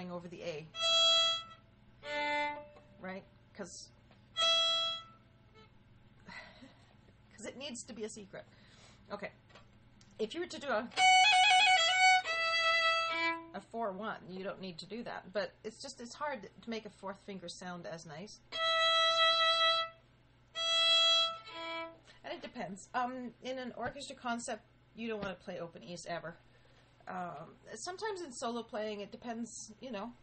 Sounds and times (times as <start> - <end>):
Speech: 0.0 - 0.8, 3.0 - 4.0, 7.3 - 8.5, 9.1 - 9.4, 10.1 - 11.0, 13.5 - 18.5, 22.2 - 26.4, 27.0 - 30.2
Violin, fiddle: 0.7 - 2.8, 4.4 - 5.2, 10.9 - 13.5, 18.5 - 20.0, 20.6 - 22.0.